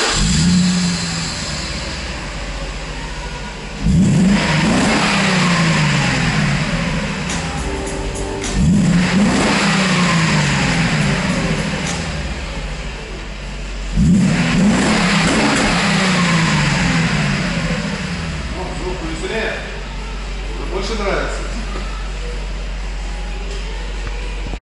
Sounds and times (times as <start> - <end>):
Speech: 18.5 - 19.8, 20.6 - 21.9.